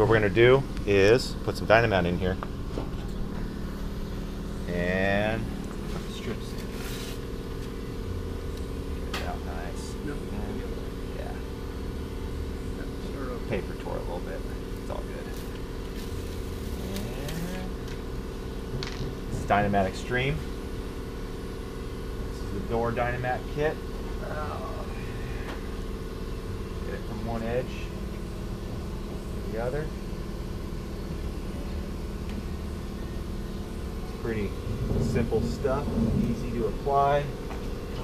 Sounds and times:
Speech: 0.0s - 2.4s, 4.7s - 6.6s, 9.2s - 11.5s, 12.8s - 15.4s, 19.3s - 20.5s, 22.4s - 25.0s, 26.8s - 27.9s, 29.4s - 30.0s, 34.2s - 37.4s.

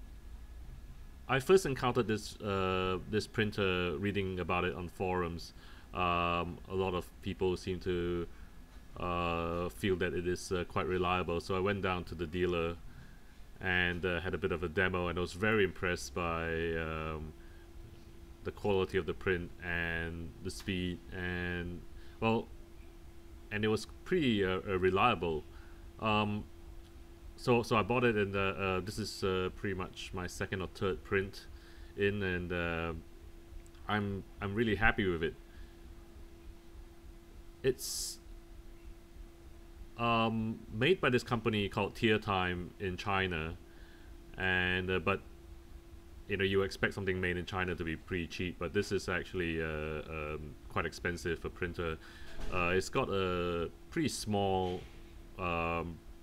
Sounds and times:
Speech: 1.3s - 8.3s, 9.0s - 12.8s, 13.6s - 17.4s, 18.4s - 22.5s, 23.5s - 26.5s, 27.4s - 33.0s, 33.8s - 35.4s, 37.6s - 38.2s, 40.0s - 43.6s, 44.4s - 45.3s, 46.3s - 56.0s.

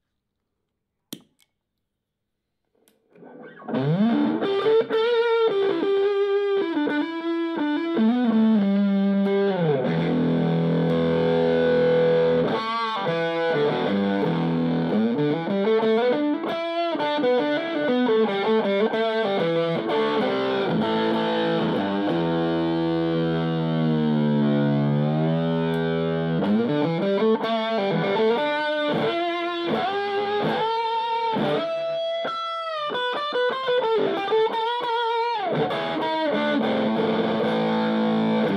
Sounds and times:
Effects unit: 2.7s - 38.5s
Guitar: 3.0s - 38.5s
Rock music: 34.0s - 38.5s.

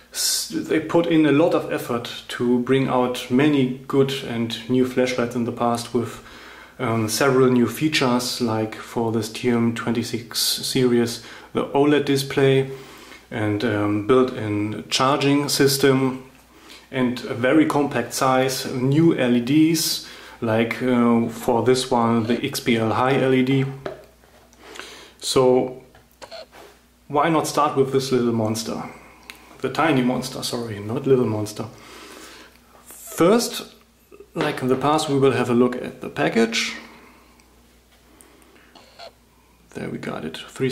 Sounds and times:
Speech: 0.1s - 24.0s, 25.2s - 25.9s, 27.1s - 31.8s, 32.8s - 37.0s, 39.7s - 40.7s.

